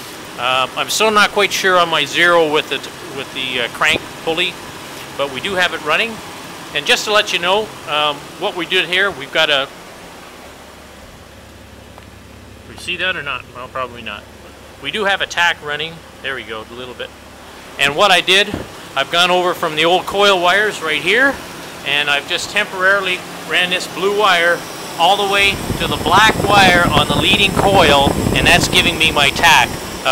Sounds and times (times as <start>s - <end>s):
Heavy engine (low frequency): 0.0s - 30.1s
Speech: 0.4s - 6.2s, 6.8s - 9.7s, 12.7s - 17.1s, 17.8s - 30.1s.